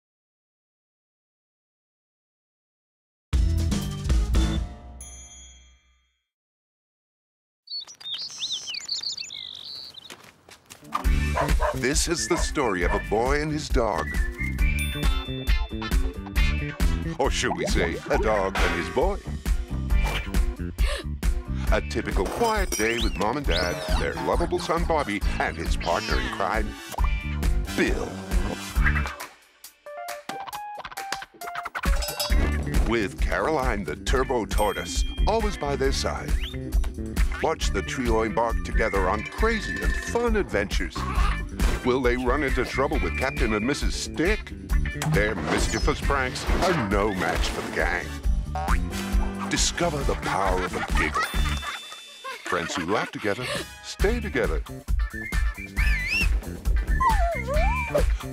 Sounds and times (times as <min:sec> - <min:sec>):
Music: 0:03.3 - 0:05.3, 0:10.9 - 0:52.2, 0:52.8 - 0:58.3.